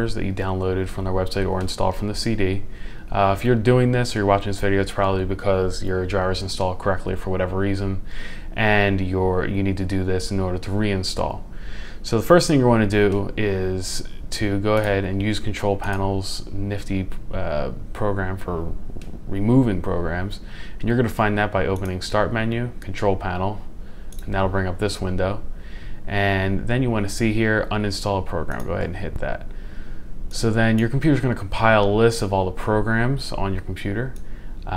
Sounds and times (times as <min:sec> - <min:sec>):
Speech: 0:00.0 - 0:25.5, 0:26.1 - 0:29.5, 0:30.3 - 0:34.7.